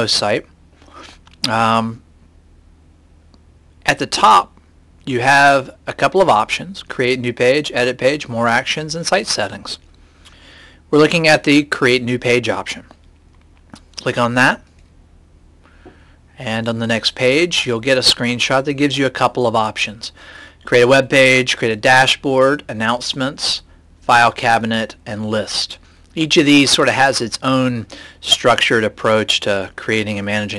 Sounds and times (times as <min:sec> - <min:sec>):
Speech: 0:00.0 - 0:00.5, 0:01.4 - 0:02.0, 0:03.8 - 0:09.8, 0:10.9 - 0:13.0, 0:14.0 - 0:14.7, 0:16.4 - 0:30.5.